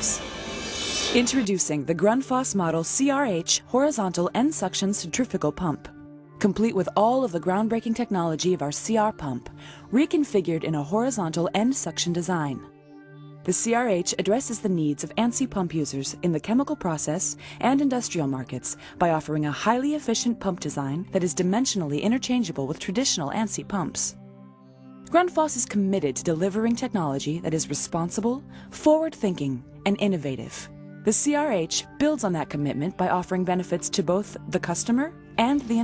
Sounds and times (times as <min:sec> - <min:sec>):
Music: 0:00.0 - 0:35.8
Speech: 0:01.2 - 0:12.7, 0:13.5 - 0:24.1, 0:25.1 - 0:35.8.